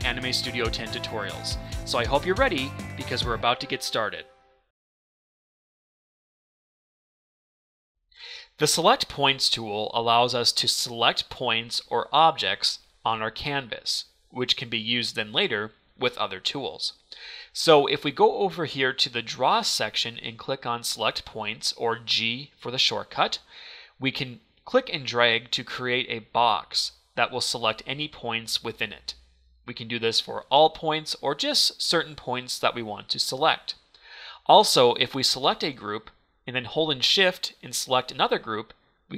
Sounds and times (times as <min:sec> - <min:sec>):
Speech: 0:00.0 - 0:04.3, 0:08.5 - 0:33.8, 0:34.4 - 0:39.1.